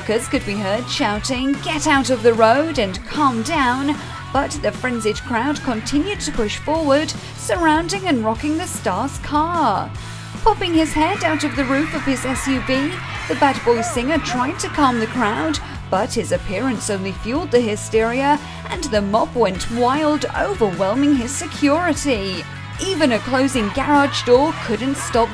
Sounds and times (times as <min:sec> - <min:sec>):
Music: 0:00.0 - 0:25.3
Speech: 0:00.0 - 0:25.3.